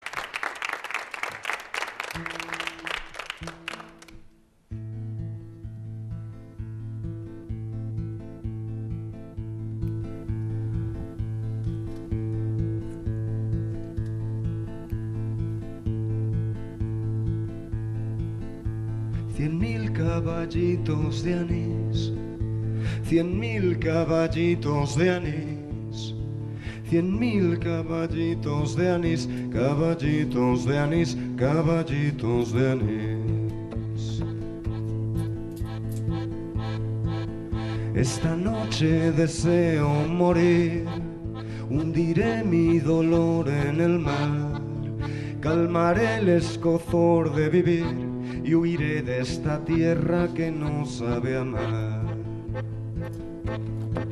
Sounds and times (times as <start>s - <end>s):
Music: 1.7s - 54.1s.